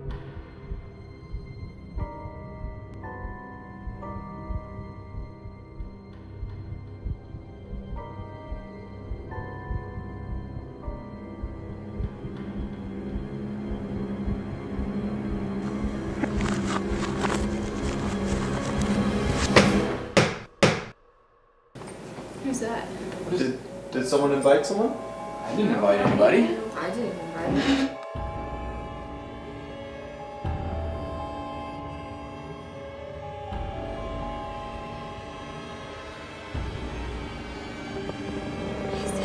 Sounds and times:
Music: 0:00.0 - 0:20.6, 0:22.4 - 0:39.2.

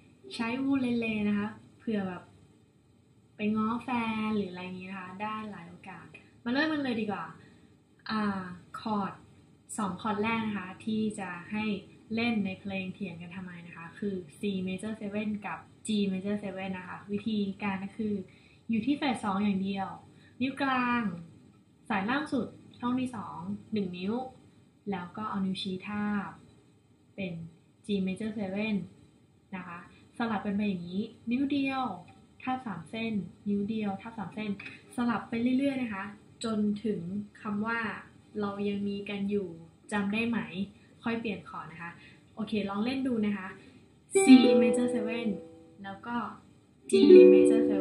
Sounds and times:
Speech: 0:00.3 - 0:02.3, 0:03.4 - 0:07.4, 0:08.1 - 0:21.3, 0:21.9 - 0:26.4, 0:27.2 - 0:29.0, 0:29.6 - 0:47.8.

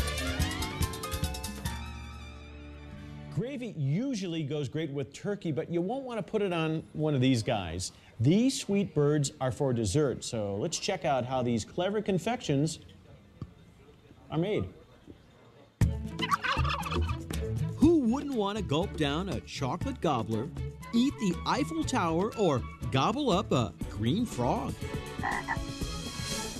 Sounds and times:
Gobble: 0:16.2 - 0:17.2, 0:25.2 - 0:25.6.

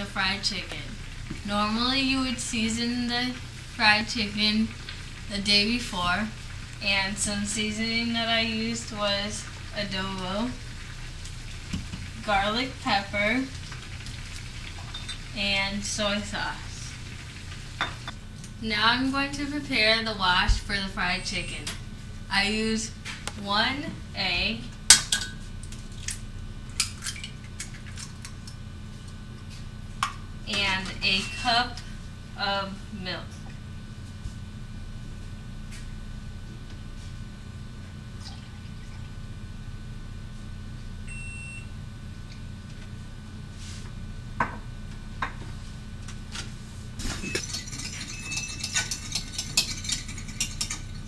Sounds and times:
Speech: 0:00.0 - 0:04.7, 0:05.3 - 0:10.6, 0:12.2 - 0:13.5, 0:15.4 - 0:16.9, 0:18.6 - 0:21.7, 0:22.3 - 0:24.7, 0:30.5 - 0:31.8, 0:32.4 - 0:33.4.

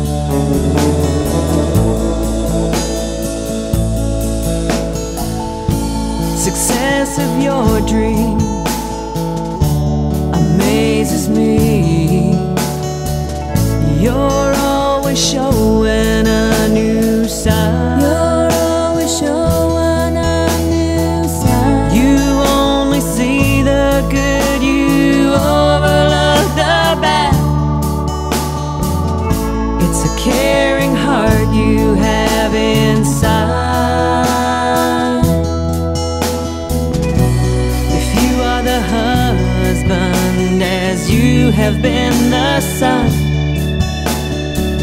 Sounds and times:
Music: 0:00.0 - 0:44.8.

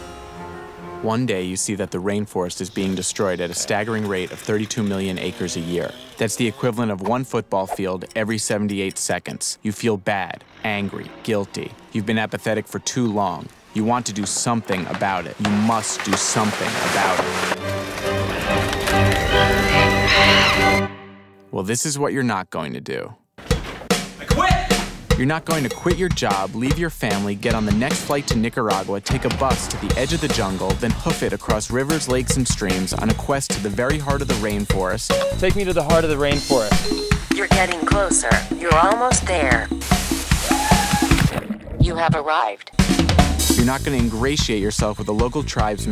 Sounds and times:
Music: 0:00.0 - 0:03.4, 0:15.4 - 0:21.6, 0:23.4 - 0:41.4, 0:42.7 - 0:45.9
Speech: 0:01.0 - 0:17.3, 0:21.5 - 0:23.2, 0:24.2 - 0:39.7, 0:41.8 - 0:42.7, 0:43.6 - 0:45.9.

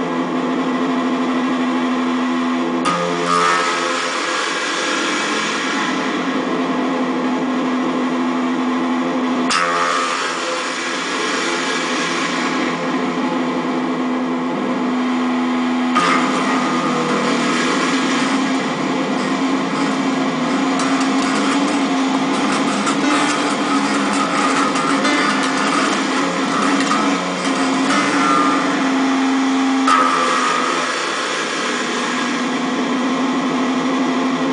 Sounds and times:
Reverberation: 0:01.4 - 0:34.5.

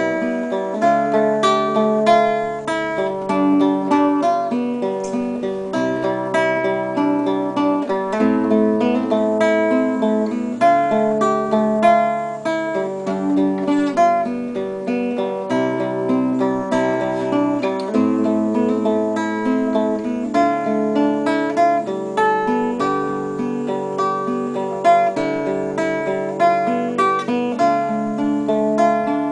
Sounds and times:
Acoustic guitar: 0:00.0 - 0:29.3
Strum: 0:00.0 - 0:29.3.

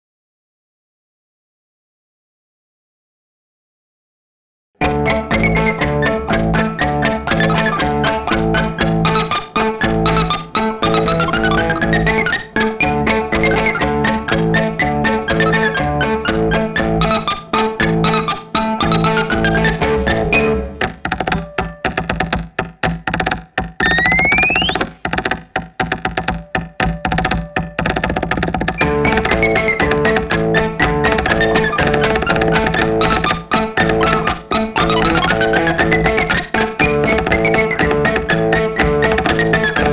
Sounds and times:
Electric guitar: 0:04.8 - 0:39.9.

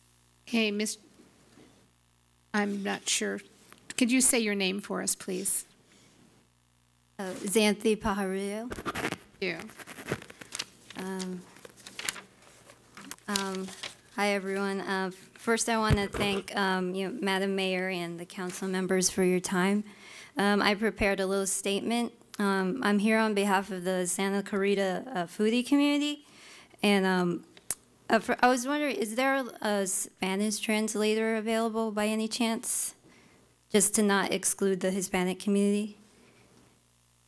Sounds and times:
Inside, small room: 0:00.0 - 0:37.2
Speech: 0:00.5 - 0:01.0, 0:02.6 - 0:05.7, 0:07.2 - 0:08.7, 0:09.4 - 0:09.7, 0:11.0 - 0:11.5, 0:13.2 - 0:26.2, 0:26.8 - 0:27.5, 0:28.1 - 0:33.0, 0:33.7 - 0:36.0.

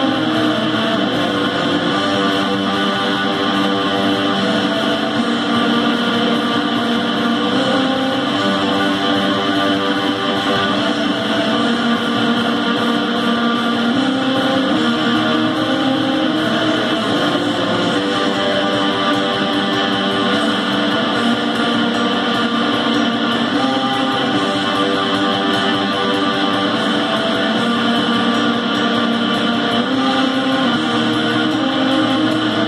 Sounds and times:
Bass guitar: 0:00.0 - 0:32.6
Strum: 0:00.0 - 0:32.6.

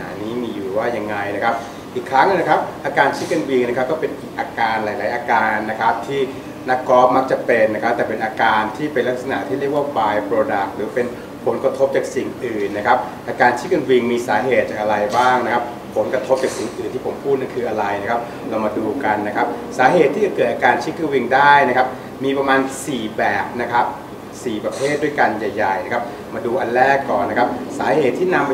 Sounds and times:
Speech: 0:00.0 - 0:28.5.

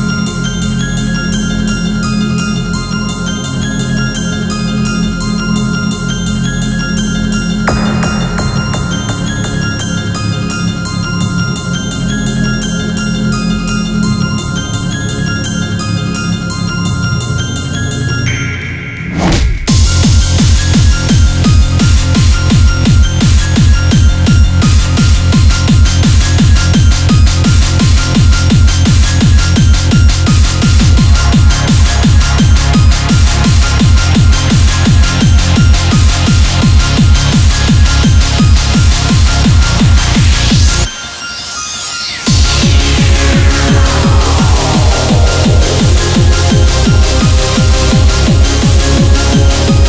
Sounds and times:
Music: 0:00.0 - 0:49.8.

